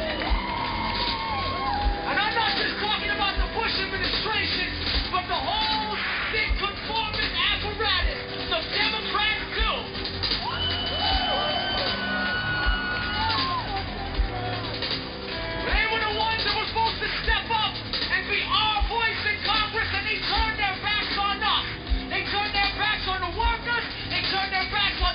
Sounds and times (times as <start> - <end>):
Music: 0.0 - 25.1
Narration, monologue: 2.0 - 10.4, 15.6 - 25.1
Male speech, man speaking: 2.1 - 9.9, 15.7 - 25.1.